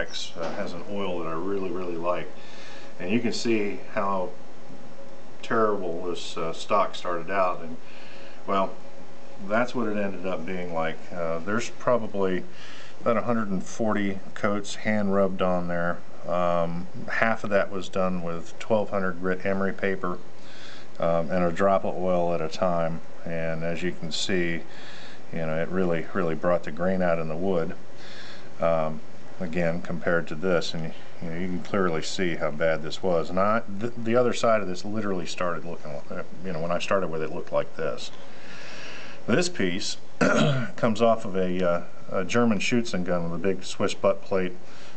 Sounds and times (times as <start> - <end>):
Speech: 0.0 - 2.4, 3.0 - 4.4, 5.4 - 8.8, 9.4 - 20.2, 21.0 - 24.7, 25.3 - 27.8, 28.6 - 38.2, 39.2 - 44.6.